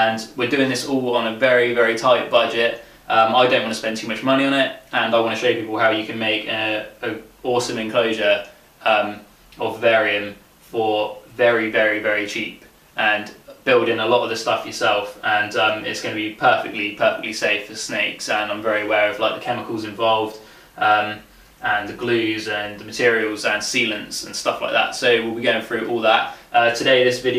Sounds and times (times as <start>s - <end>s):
Inside, small room: 0.0s - 27.3s
Speech: 0.0s - 27.3s.